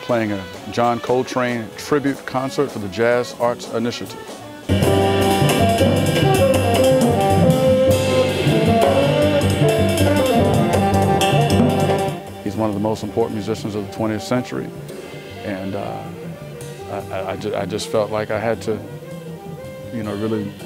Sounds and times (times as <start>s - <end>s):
Speech: 0.0s - 4.2s, 12.4s - 14.7s, 15.4s - 16.2s, 16.9s - 18.9s, 19.9s - 20.6s
Music: 0.0s - 20.6s.